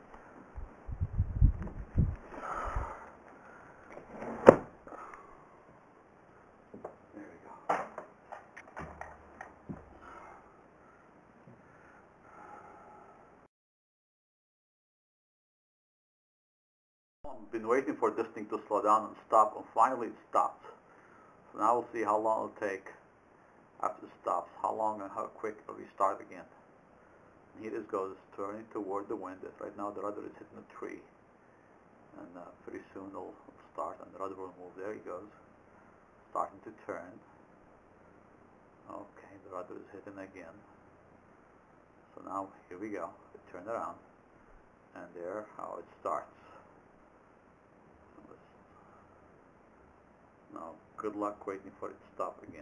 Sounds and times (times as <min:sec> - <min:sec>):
Speech: 0:07.1 - 0:07.7, 0:17.3 - 0:20.8, 0:21.6 - 0:23.0, 0:23.8 - 0:26.6, 0:27.6 - 0:31.1, 0:32.1 - 0:35.4, 0:36.3 - 0:37.3, 0:38.9 - 0:40.7, 0:42.1 - 0:44.1, 0:44.9 - 0:46.6, 0:50.5 - 0:52.6.